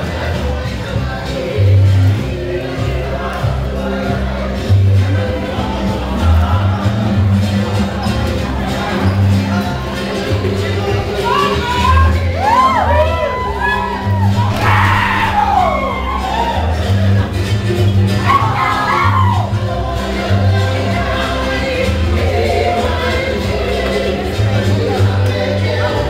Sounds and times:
Music: 0.0s - 26.1s
Speech: 7.7s - 13.9s.

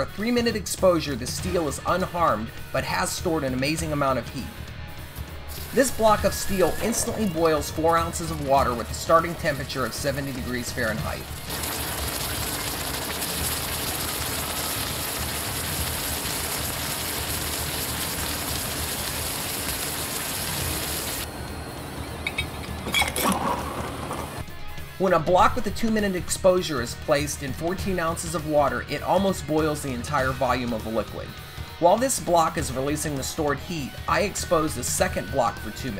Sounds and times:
Speech: 0.0s - 4.5s, 5.8s - 11.3s, 25.0s - 35.9s
Music: 0.0s - 19.2s, 21.2s - 35.9s
Water: 5.7s - 21.4s, 22.1s - 24.4s
Outside, rural or natural: 11.4s - 24.4s.

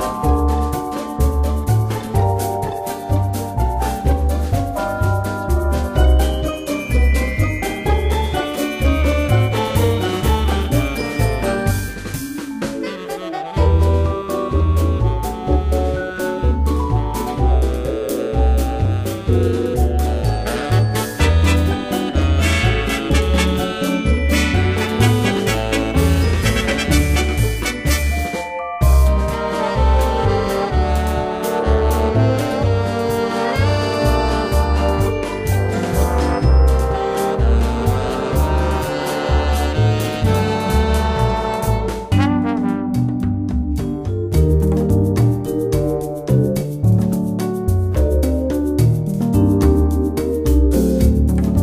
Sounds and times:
Soundtrack music: 0.0s - 51.6s.

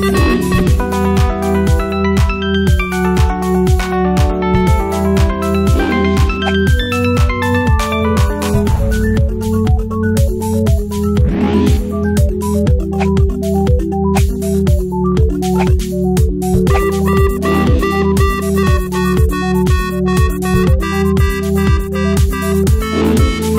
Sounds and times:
Music: 0.0s - 23.5s.

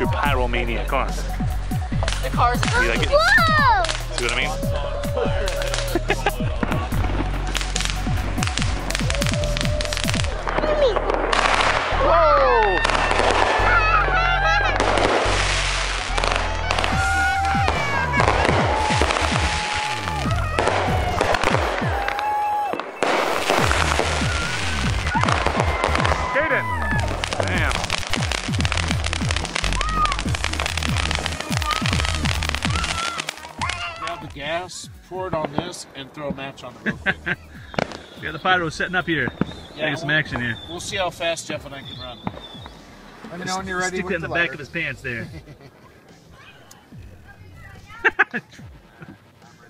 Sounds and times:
Music: 0.0s - 49.7s
Outside, urban or manmade: 0.0s - 49.7s
Fireworks: 1.9s - 34.5s, 35.3s - 44.9s.

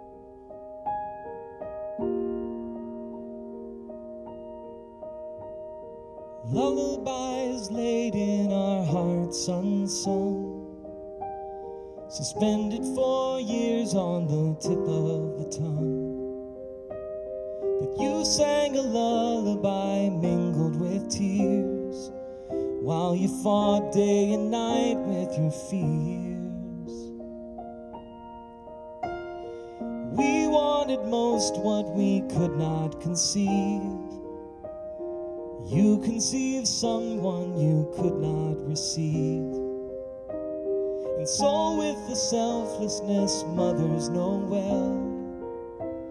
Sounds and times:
Music: 0.0s - 46.1s.

